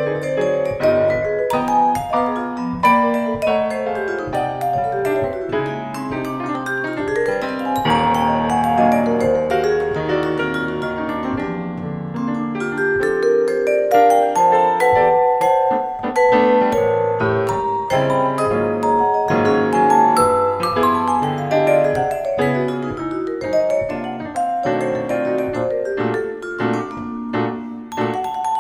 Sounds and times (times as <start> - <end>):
Piano: 0.0 - 28.6
Vibraphone: 0.0 - 28.6.